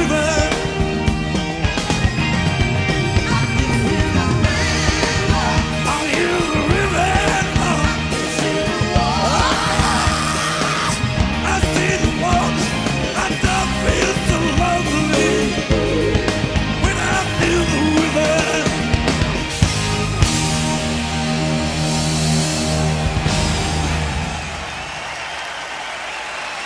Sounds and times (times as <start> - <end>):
Singing: 3.2 - 16.1, 16.8 - 18.9.